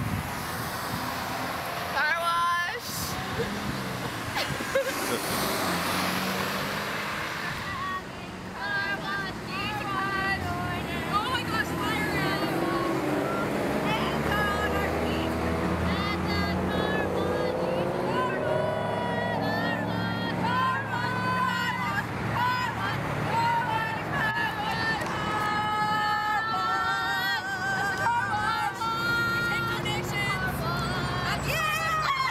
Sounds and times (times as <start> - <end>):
Car passing by: 0.0 - 32.3.